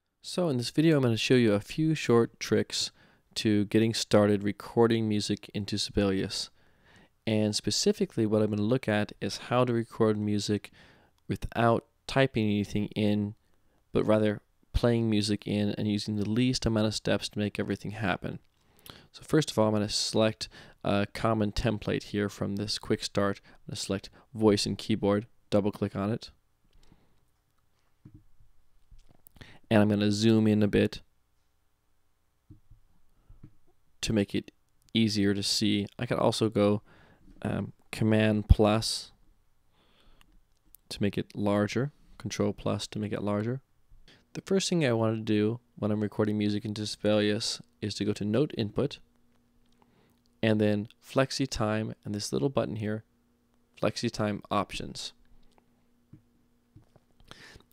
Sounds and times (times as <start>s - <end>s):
Speech: 0.2s - 6.6s, 7.2s - 10.7s, 11.3s - 18.5s, 19.1s - 26.4s, 29.7s - 31.1s, 34.0s - 39.2s, 40.8s - 43.7s, 44.3s - 49.0s, 50.4s - 53.1s, 53.8s - 55.2s.